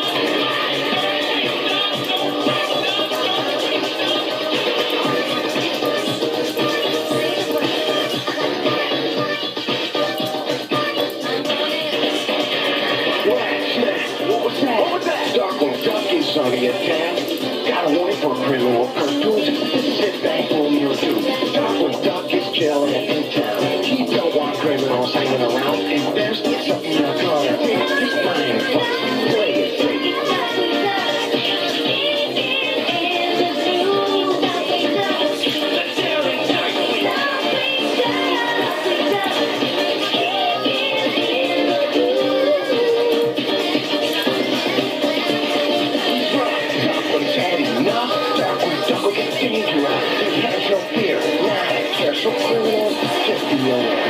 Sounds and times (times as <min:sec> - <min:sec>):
Music: 0:00.0 - 0:54.1
Speech: 0:13.2 - 0:29.7, 0:46.3 - 0:54.1.